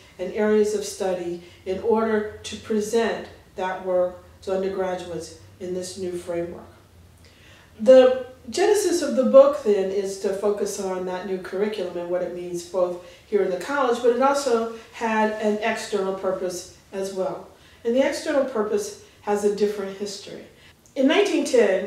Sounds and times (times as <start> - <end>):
Speech: 0.0 - 6.8, 7.8 - 21.8.